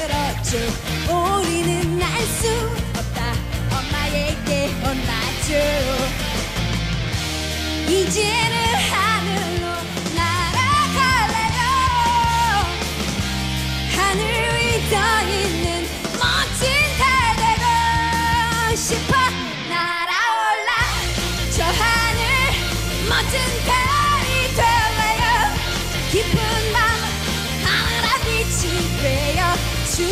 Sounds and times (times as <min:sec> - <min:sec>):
Pop music: 0:00.0 - 0:30.1.